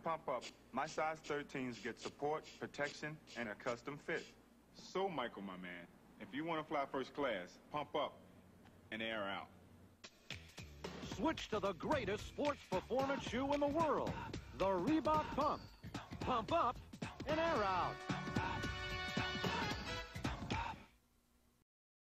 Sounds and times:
Speech: 0:00.0 - 0:08.2, 0:08.9 - 0:09.6, 0:11.1 - 0:15.6, 0:16.2 - 0:18.0
Music: 0:10.0 - 0:21.0.

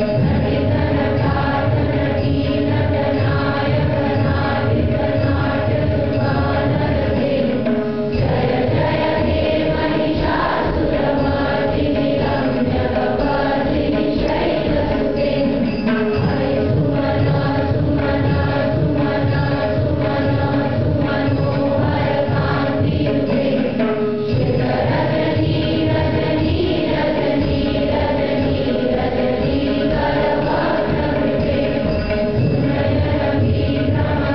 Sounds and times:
Mantra: 0:00.0 - 0:34.3.

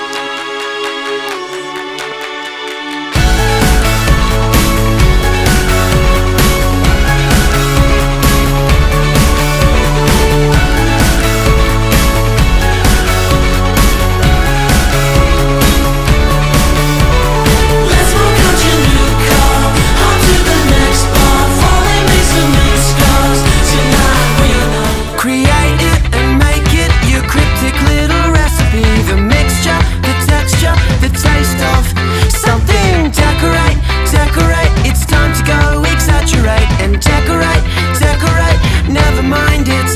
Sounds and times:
Music: 0:00.0 - 0:39.9.

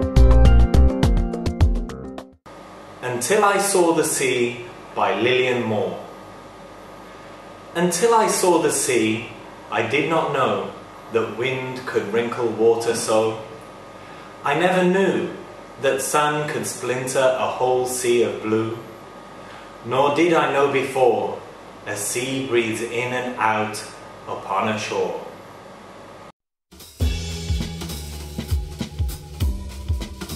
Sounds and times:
Music: 0:00.0 - 0:02.4, 0:26.7 - 0:30.3
Narration, monologue: 0:02.5 - 0:26.3
Male speech, man speaking: 0:03.0 - 0:06.1, 0:07.8 - 0:13.5, 0:14.5 - 0:18.9, 0:19.9 - 0:25.3.

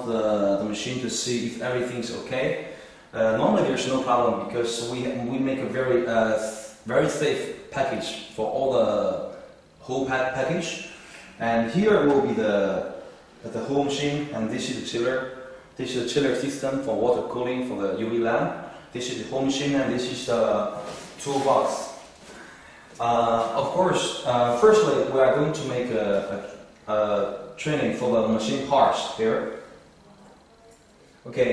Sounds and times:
Speech: 0:00.0 - 0:22.1, 0:23.0 - 0:31.5.

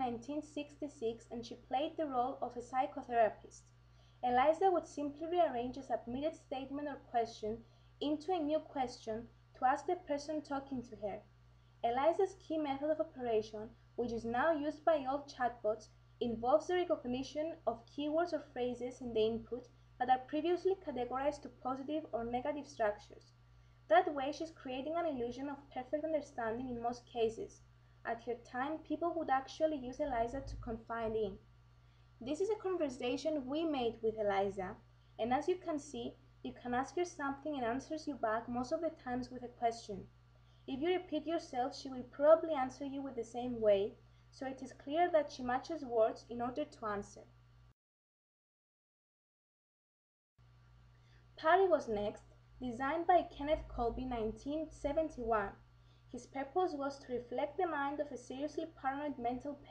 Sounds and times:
Speech: 0:00.0 - 0:23.3, 0:23.9 - 0:31.4, 0:32.2 - 0:40.1, 0:40.7 - 0:47.3, 0:51.4 - 0:59.7.

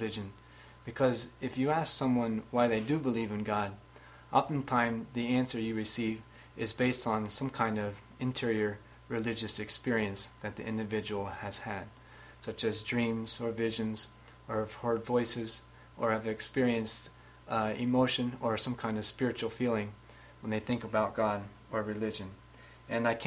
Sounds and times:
Speech: 0:00.0 - 0:23.2.

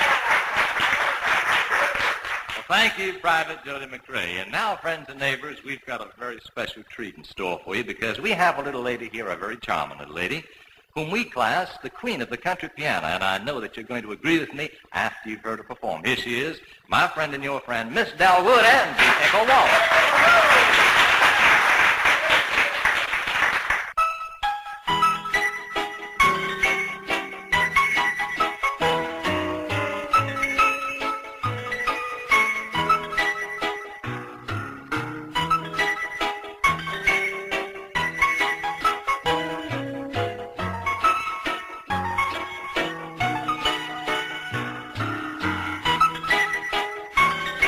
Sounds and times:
Music: 0:00.0 - 0:20.6, 0:23.9 - 0:47.6.

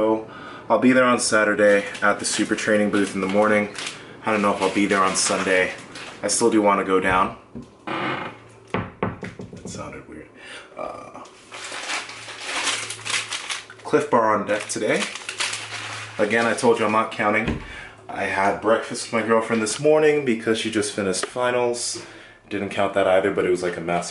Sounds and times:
Speech: 0:00.0 - 0:07.4, 0:09.6 - 0:11.3, 0:13.8 - 0:15.2, 0:16.2 - 0:24.1.

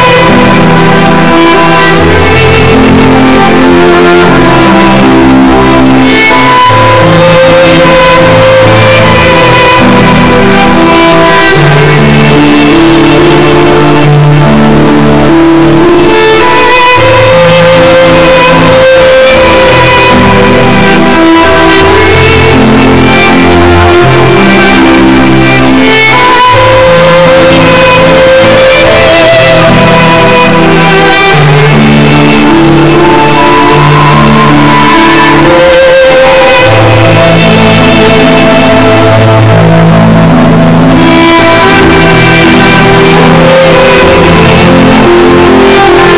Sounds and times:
Violin, fiddle: 0:00.0 - 0:46.1.

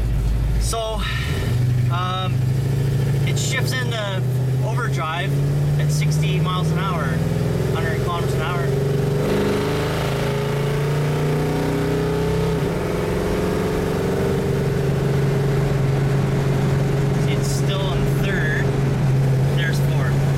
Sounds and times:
Speech: 0:00.6 - 0:01.1, 0:01.9 - 0:02.4, 0:03.3 - 0:08.7, 0:17.2 - 0:18.7, 0:19.6 - 0:20.2.

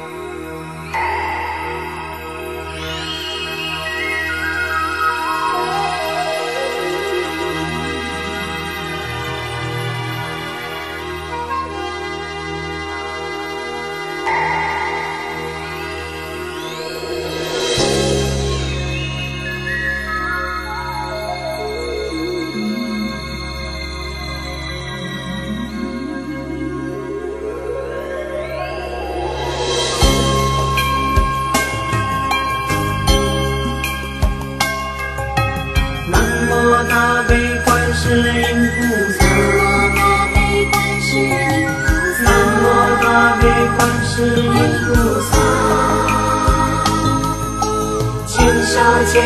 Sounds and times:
Music: 0:00.0 - 0:49.2.

